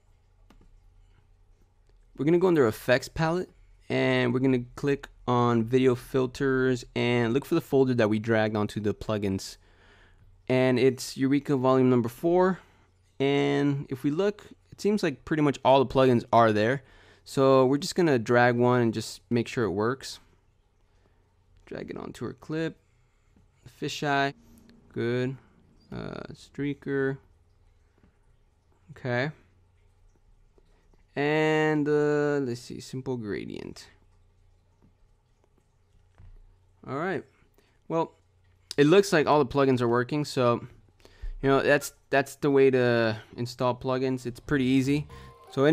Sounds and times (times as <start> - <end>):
Inside, small room: 0.0 - 45.7
Speech: 2.2 - 9.6, 10.5 - 12.6, 13.2 - 20.3, 21.6 - 22.8, 23.7 - 27.3, 28.9 - 29.4, 31.2 - 34.0, 36.8 - 37.3, 37.9 - 38.1, 38.7 - 40.8, 41.4 - 45.7.